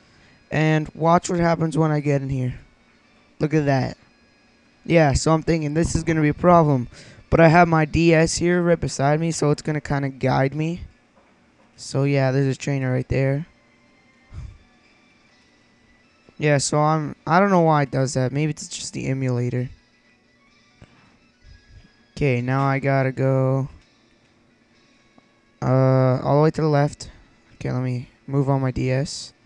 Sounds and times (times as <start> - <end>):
Speech: 0.5 - 2.6, 3.4 - 4.0, 4.9 - 10.9, 11.8 - 13.5, 16.4 - 19.8, 22.2 - 23.8, 25.6 - 29.4.